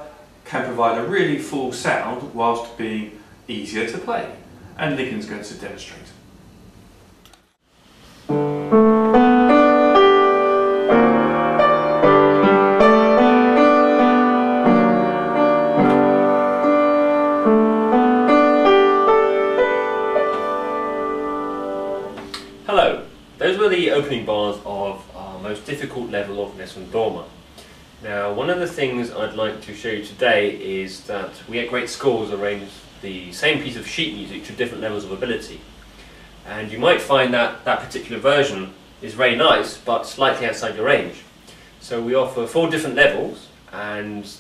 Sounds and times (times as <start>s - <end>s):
Speech: 0.0s - 6.2s, 22.7s - 27.4s, 28.0s - 35.7s, 36.4s - 44.4s
Music: 8.2s - 23.4s.